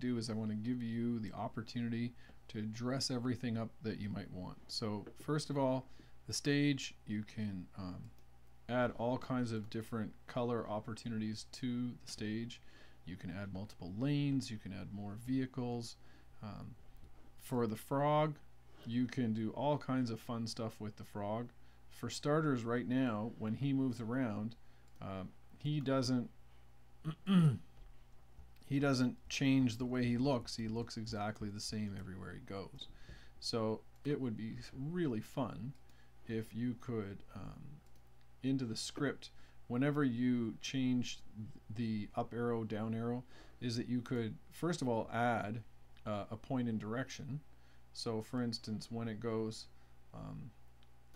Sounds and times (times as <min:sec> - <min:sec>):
Speech: 0:00.0 - 0:16.8, 0:17.4 - 0:26.4, 0:28.6 - 0:37.8, 0:38.4 - 0:50.6.